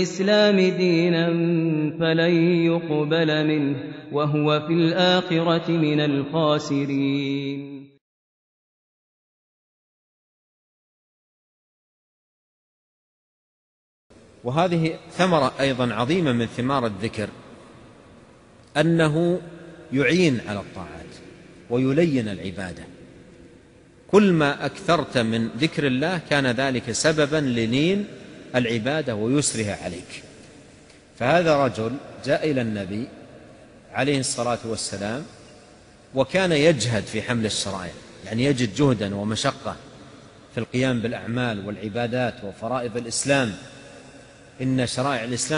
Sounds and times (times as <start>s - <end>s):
Speech: 0.0s - 7.4s, 14.4s - 17.3s, 18.7s - 22.9s, 24.1s - 30.2s, 31.2s - 33.1s, 33.9s - 35.3s, 36.2s - 39.8s, 40.6s - 43.6s, 44.6s - 45.5s.